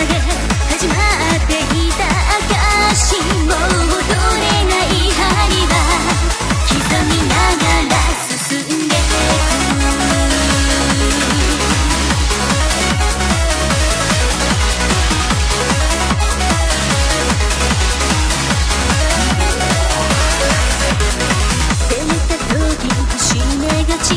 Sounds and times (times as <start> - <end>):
Music: 0.0 - 24.1.